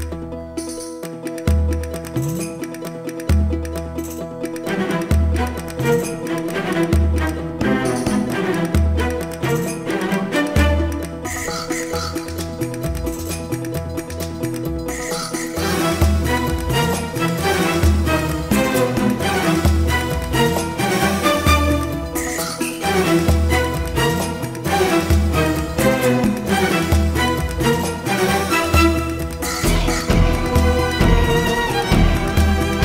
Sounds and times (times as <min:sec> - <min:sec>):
Exciting music: 0:00.0 - 0:32.8
Rhythm and blues: 0:00.0 - 0:32.8.